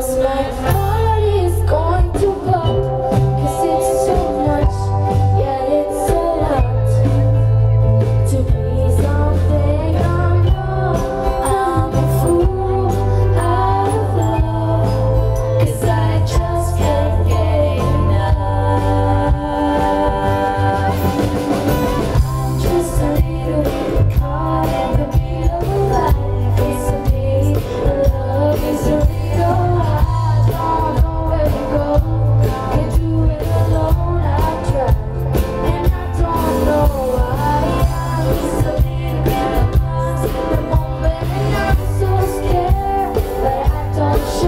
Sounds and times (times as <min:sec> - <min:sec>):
Music: 0:00.0 - 0:44.4.